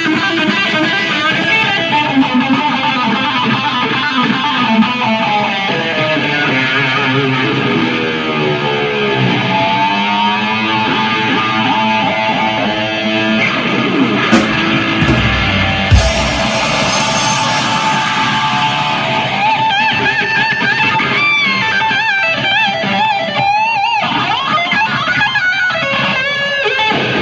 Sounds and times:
Electric guitar: 0.0s - 27.2s.

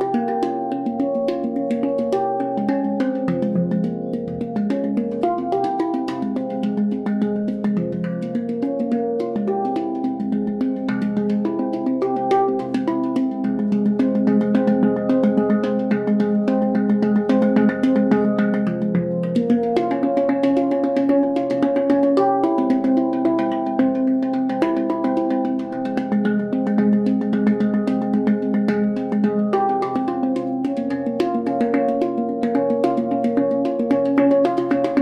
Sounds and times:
Music: 0.0s - 35.0s.

